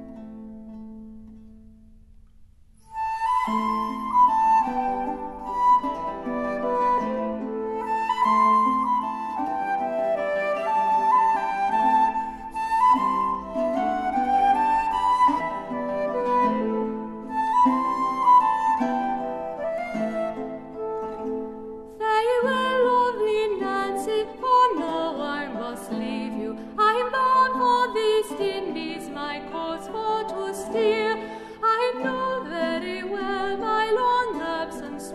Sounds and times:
Music: 0.0 - 35.1.

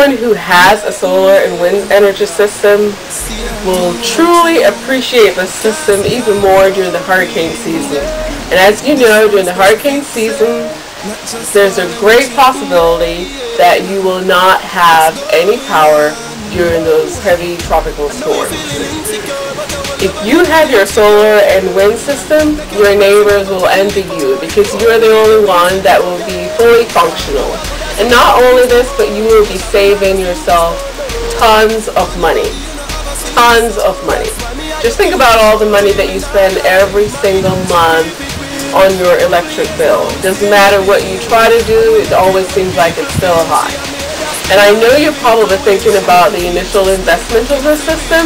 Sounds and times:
Speech: 0.0 - 19.3, 20.0 - 32.6, 33.2 - 43.8, 44.4 - 48.2
Music: 0.0 - 48.2.

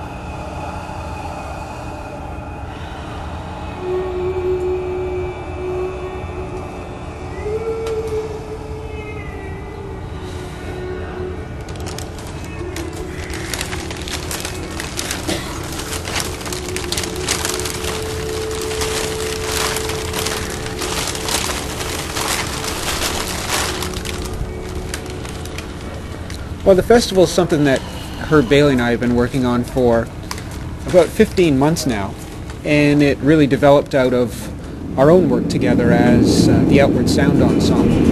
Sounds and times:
Music: 0.0 - 31.1
Speech: 26.7 - 30.1, 30.9 - 38.1.

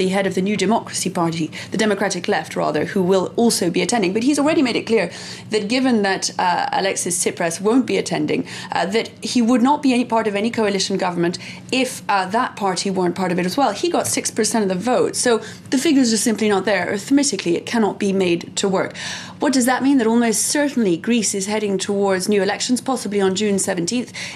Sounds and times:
Speech: 0.0 - 24.2.

